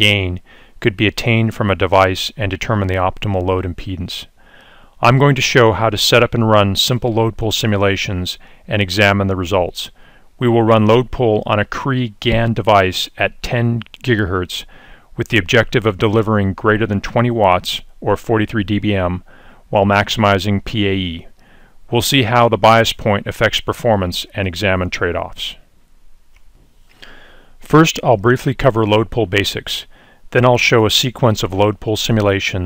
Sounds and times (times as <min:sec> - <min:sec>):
Speech: 0:00.0 - 0:04.4, 0:05.0 - 0:25.6, 0:27.6 - 0:32.6.